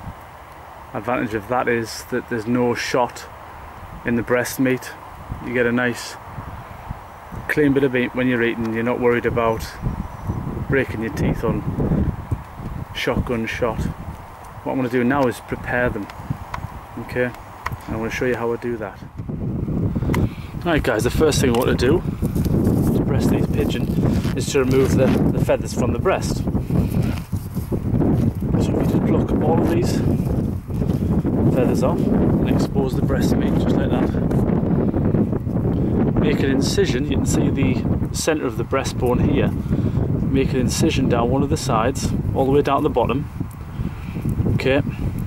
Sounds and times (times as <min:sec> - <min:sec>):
Speech: 0:00.9 - 0:03.3, 0:04.0 - 0:06.2, 0:07.5 - 0:09.8, 0:10.7 - 0:11.7, 0:12.9 - 0:14.0, 0:14.6 - 0:16.1, 0:17.0 - 0:19.1, 0:20.6 - 0:22.0, 0:23.0 - 0:26.5, 0:28.6 - 0:30.1, 0:31.5 - 0:34.2, 0:36.2 - 0:39.6, 0:40.3 - 0:43.3, 0:44.6 - 0:45.0.